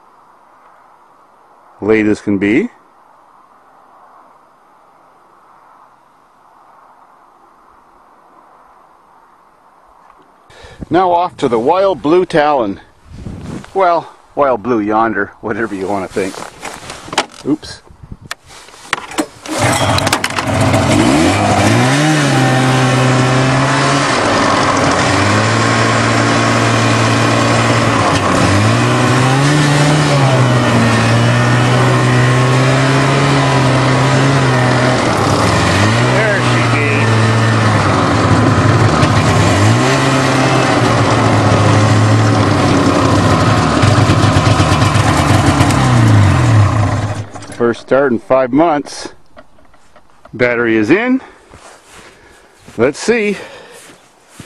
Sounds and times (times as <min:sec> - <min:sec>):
Vehicle: 0:15.2 - 0:17.8, 0:18.5 - 0:54.4.